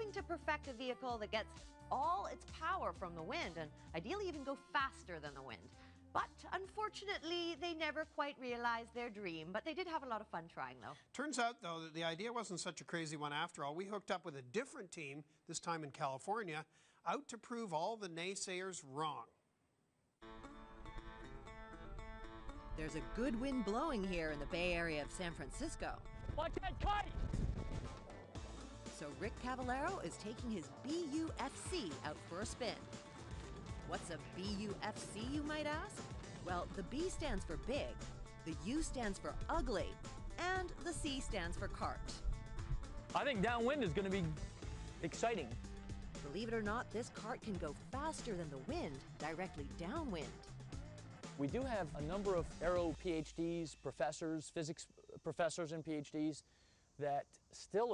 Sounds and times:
Music: 0.0s - 16.4s, 20.2s - 56.0s
Speech: 0.0s - 19.3s, 22.8s - 27.1s, 29.0s - 32.8s, 33.9s - 42.2s, 43.2s - 44.4s, 45.0s - 45.5s, 46.2s - 50.4s, 51.4s - 56.4s, 57.0s - 57.9s.

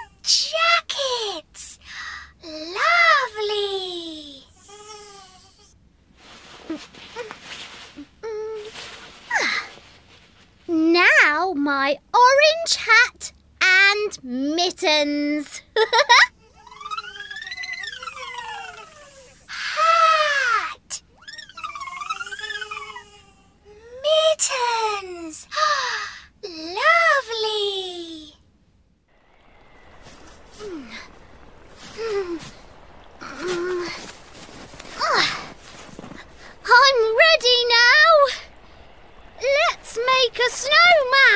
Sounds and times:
Speech: 0.0s - 1.8s, 2.4s - 4.5s, 10.7s - 15.6s, 23.9s - 25.7s, 26.4s - 28.4s, 36.6s - 38.5s, 39.4s - 41.3s.

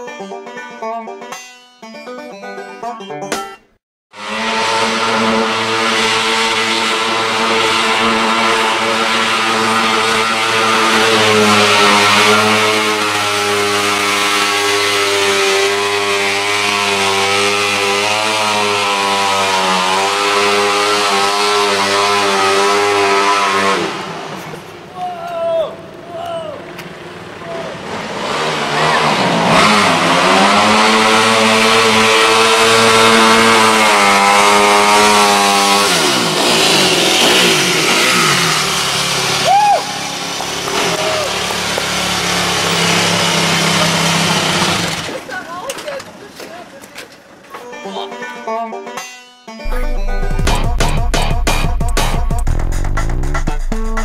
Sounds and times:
Car: 4.1s - 47.6s, 49.6s - 54.0s.

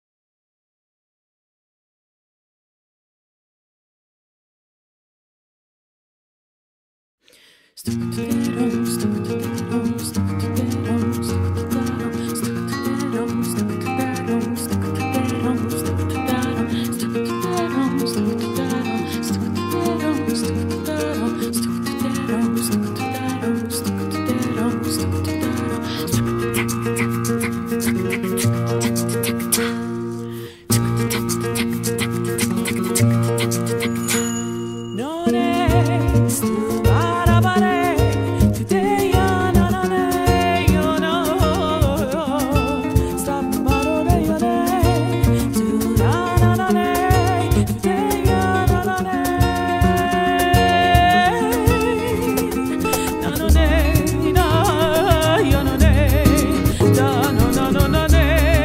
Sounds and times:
Music: 7.8s - 58.6s.

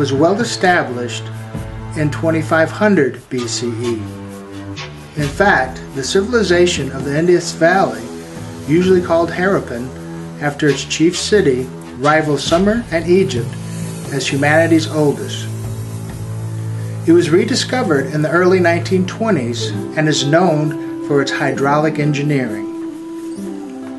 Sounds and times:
Speech: 0.0s - 1.4s, 2.0s - 4.1s, 5.2s - 8.1s, 8.7s - 15.5s, 17.1s - 22.8s
Music: 0.0s - 23.9s.

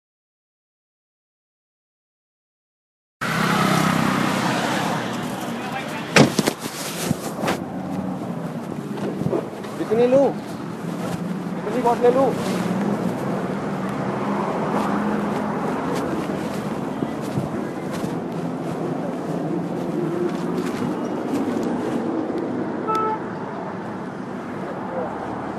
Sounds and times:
Speech: 5.3s - 6.2s, 9.8s - 10.4s, 11.6s - 12.5s, 24.6s - 25.4s.

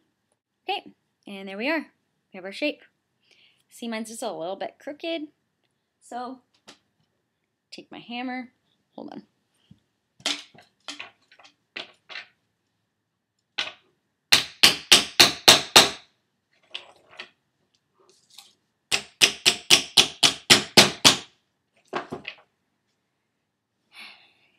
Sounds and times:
Speech: 0.6s - 2.9s, 3.7s - 5.4s, 6.0s - 6.5s, 7.7s - 9.3s.

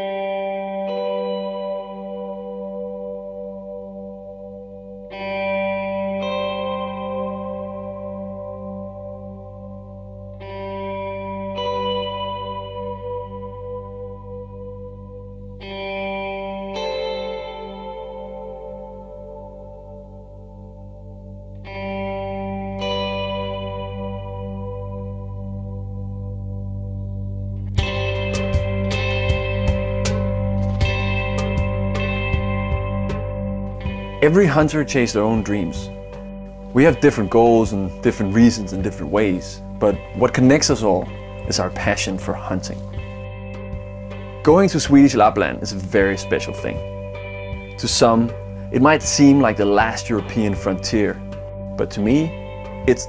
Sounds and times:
Effects unit: 0.0s - 53.0s
Music: 0.0s - 53.0s.

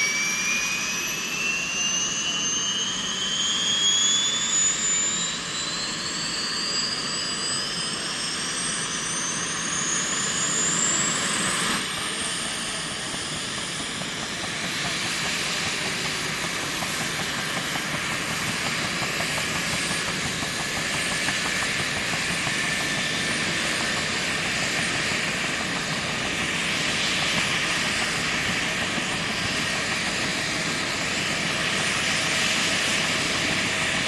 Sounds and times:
Helicopter: 0.0s - 34.0s.

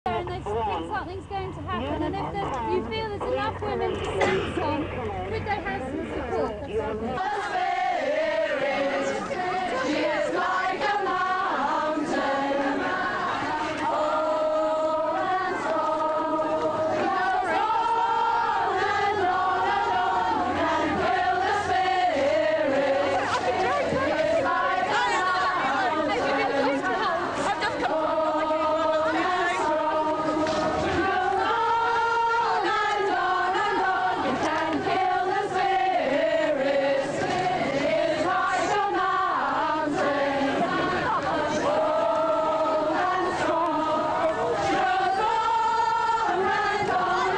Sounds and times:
Outside, urban or manmade: 0.0s - 47.3s
Chatter: 0.1s - 47.3s.

